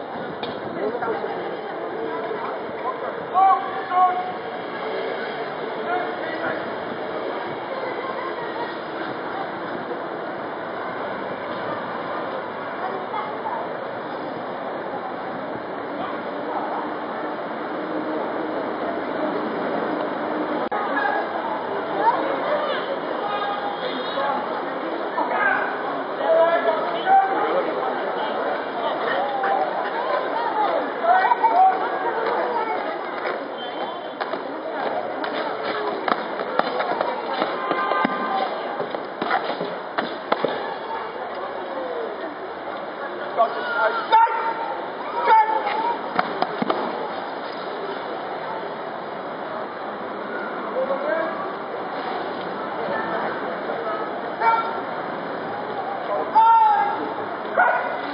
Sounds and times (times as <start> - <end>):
Speech: 0.6 - 19.4, 20.6 - 39.0, 40.4 - 58.1.